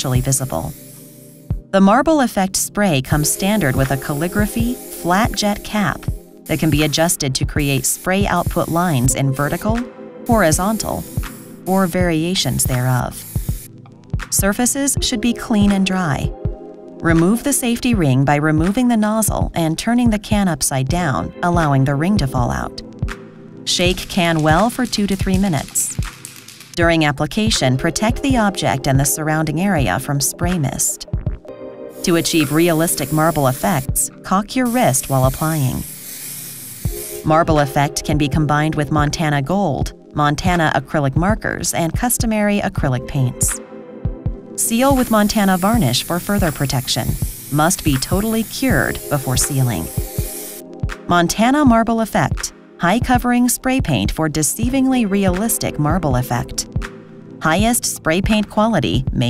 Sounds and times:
Speech: 0.0 - 0.7, 1.8 - 11.0, 11.7 - 13.2, 14.3 - 16.4, 17.0 - 22.8, 23.7 - 26.0, 26.8 - 31.1, 32.1 - 35.8, 37.3 - 43.6, 44.6 - 49.9, 51.1 - 56.7, 57.4 - 59.3
Music: 0.0 - 59.3.

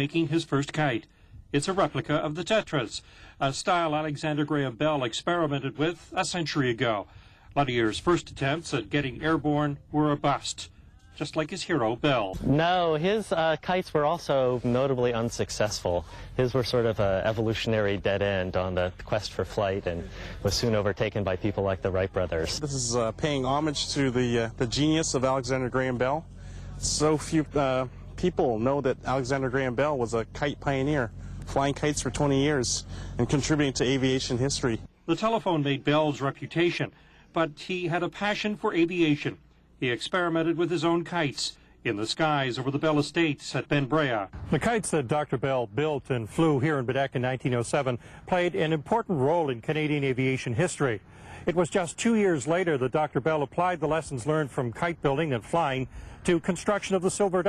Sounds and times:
Speech: 0.0 - 57.4.

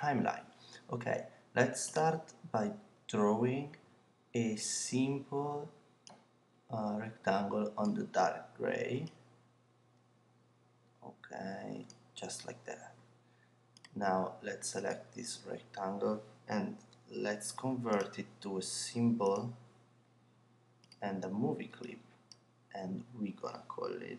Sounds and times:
Speech: 0.0 - 3.8, 4.4 - 5.7, 6.7 - 9.2, 11.0 - 13.0, 13.9 - 19.6, 21.0 - 22.0, 22.8 - 24.1.

